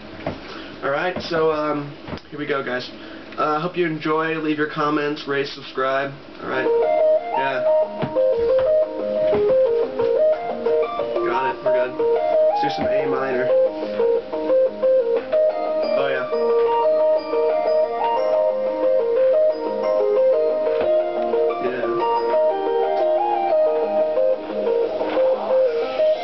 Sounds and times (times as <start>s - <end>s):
Speech: 0.8s - 6.7s, 11.2s - 12.0s, 12.6s - 13.5s, 21.6s - 22.0s
Music: 6.4s - 26.2s.